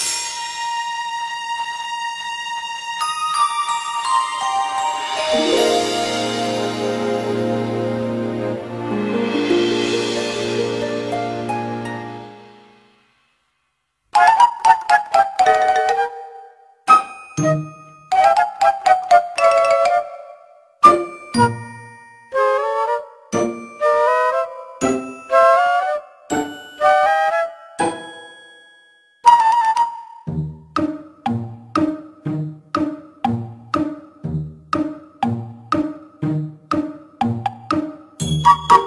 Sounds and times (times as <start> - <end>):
Music: 0.0 - 38.8.